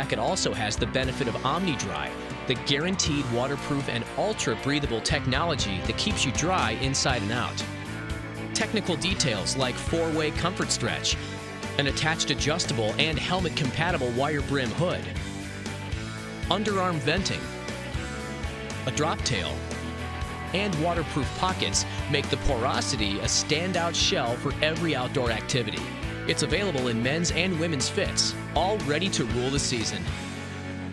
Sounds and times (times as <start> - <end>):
Speech: 0.0 - 7.8, 8.6 - 15.2, 16.5 - 17.5, 18.8 - 19.6, 20.5 - 30.2
Music: 0.0 - 30.9.